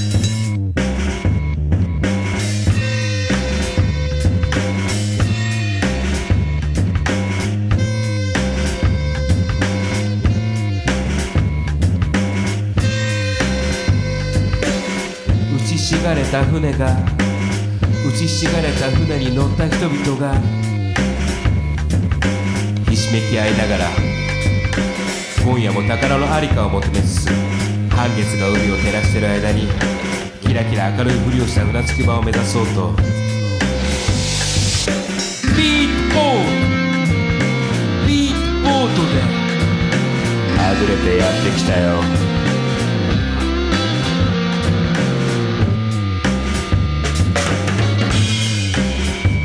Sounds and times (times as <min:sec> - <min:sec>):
Music: 0:00.0 - 0:49.4
Speech: 0:15.4 - 0:17.3, 0:18.0 - 0:20.6, 0:22.9 - 0:24.1, 0:25.4 - 0:33.1, 0:35.5 - 0:36.7, 0:38.0 - 0:39.4, 0:40.5 - 0:42.2.